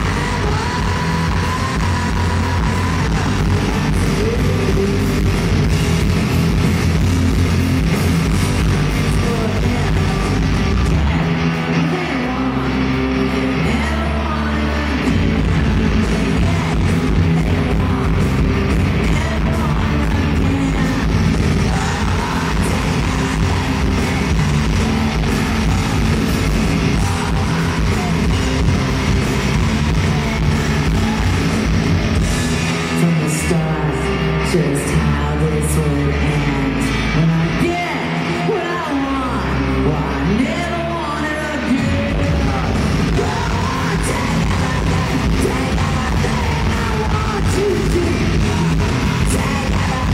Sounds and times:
Singing: 0:00.0 - 0:06.1, 0:08.3 - 0:50.1
Pop music: 0:00.0 - 0:50.1.

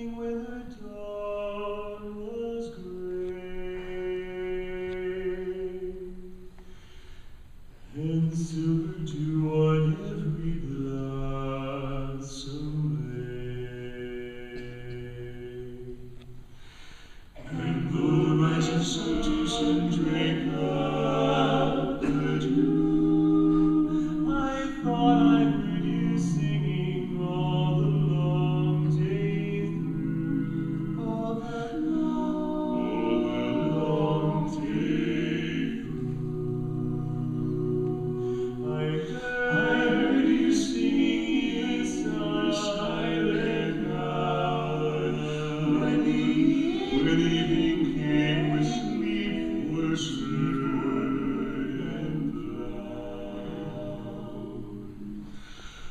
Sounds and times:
Choir: 0:00.0 - 0:06.5, 0:07.9 - 0:16.4, 0:17.3 - 0:55.9
Male singing: 0:08.0 - 0:15.9, 0:17.4 - 0:30.2, 0:38.7 - 0:54.3.

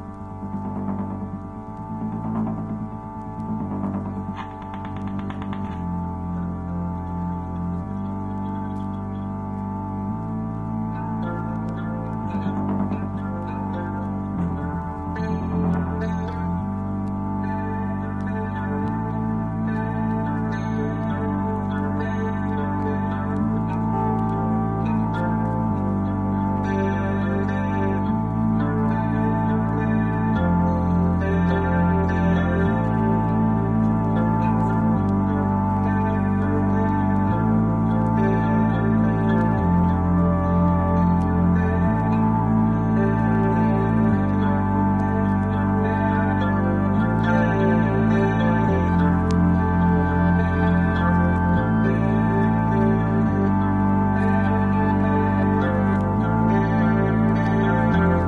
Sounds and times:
Electric guitar: 0:00.0 - 0:58.2
Strum: 0:00.0 - 0:58.2.

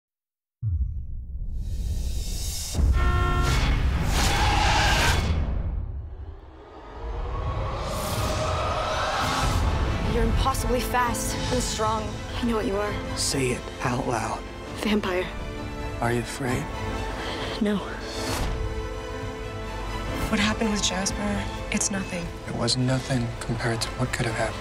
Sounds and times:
Music: 0:00.6 - 0:24.6.

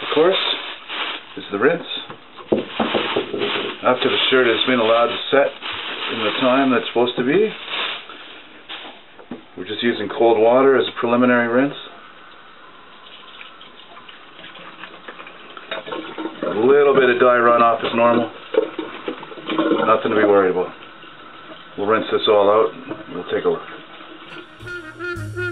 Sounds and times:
Speech: 0:00.0 - 0:00.6, 0:01.4 - 0:02.1, 0:03.8 - 0:07.6, 0:09.6 - 0:12.0, 0:16.5 - 0:18.4, 0:19.8 - 0:20.8, 0:21.8 - 0:23.7
Water tap, faucet: 0:12.9 - 0:16.8.

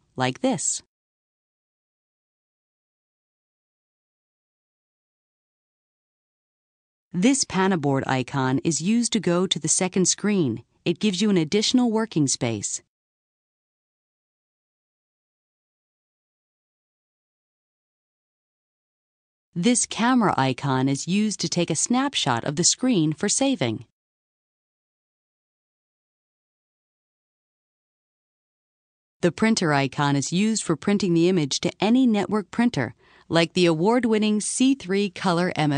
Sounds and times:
Speech: 0:00.2 - 0:00.9, 0:07.2 - 0:12.9, 0:19.6 - 0:23.9, 0:29.2 - 0:35.7.

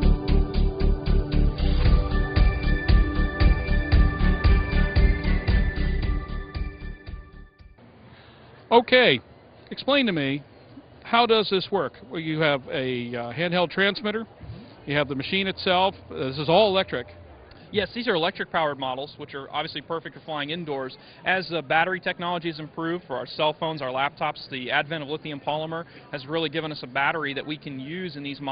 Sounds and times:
Speech: 0:08.7 - 0:14.3, 0:14.9 - 0:28.5.

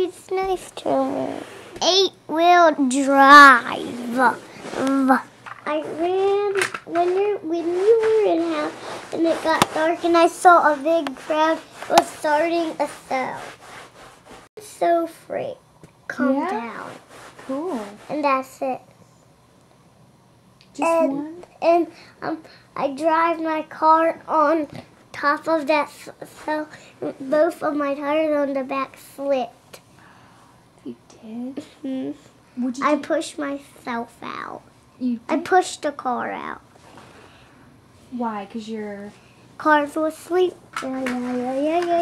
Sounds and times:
Speech: 0:05.0 - 0:13.4, 0:14.6 - 0:18.8, 0:20.7 - 0:29.5, 0:30.9 - 0:36.6, 0:38.1 - 0:42.0.

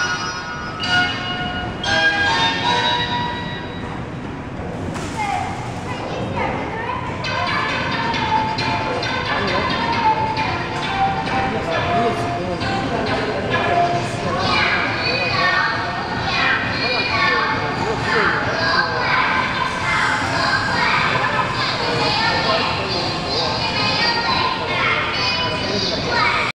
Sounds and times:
Speech: 0:05.1 - 0:26.5.

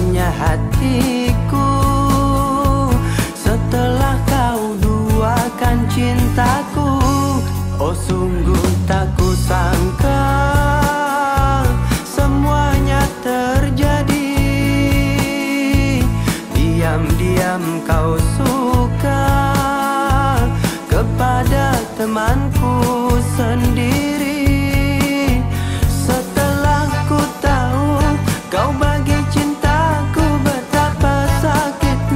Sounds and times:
Music: 0:00.0 - 0:32.1.

